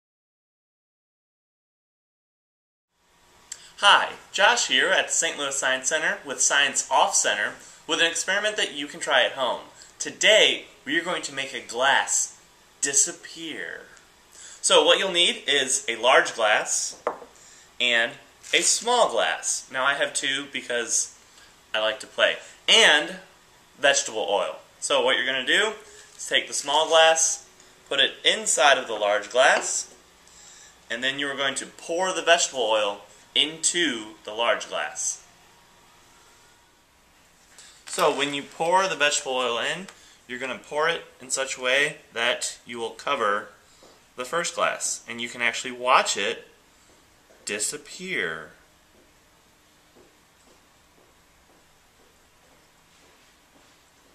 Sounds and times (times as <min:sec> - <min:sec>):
Speech: 0:03.8 - 0:14.0, 0:14.6 - 0:17.0, 0:17.8 - 0:30.0, 0:30.9 - 0:35.2, 0:37.9 - 0:43.6, 0:44.2 - 0:46.6, 0:47.4 - 0:48.6.